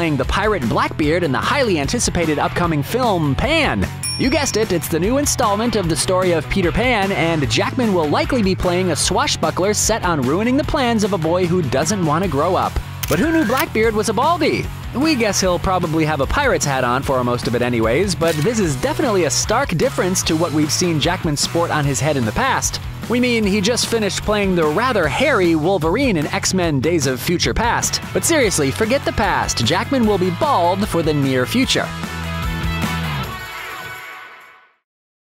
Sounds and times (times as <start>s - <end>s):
Speech: 0.0s - 31.9s
Music: 0.0s - 34.9s.